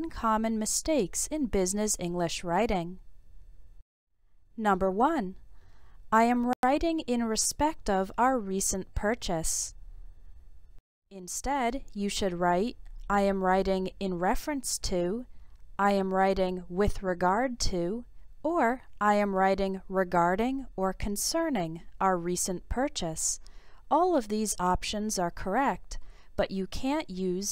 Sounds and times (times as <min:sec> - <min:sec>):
Speech: 0:00.0 - 0:03.0, 0:04.6 - 0:05.4, 0:06.2 - 0:09.8, 0:11.2 - 0:27.5.